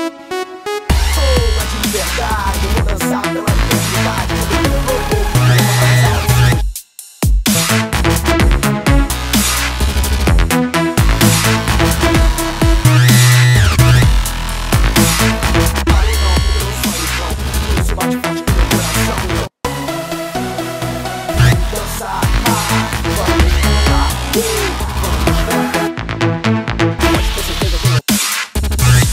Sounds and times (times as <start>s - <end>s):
Dubstep: 0.0s - 29.1s.